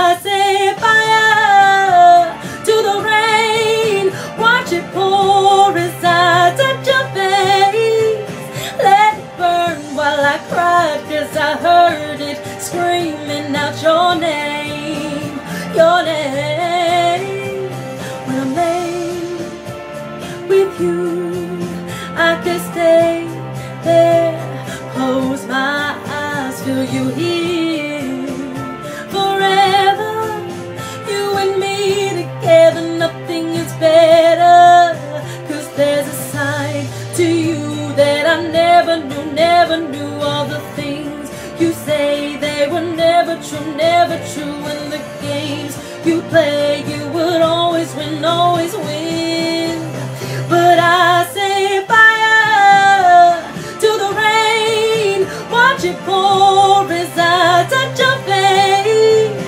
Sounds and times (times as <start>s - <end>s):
Music: 0.0s - 59.4s.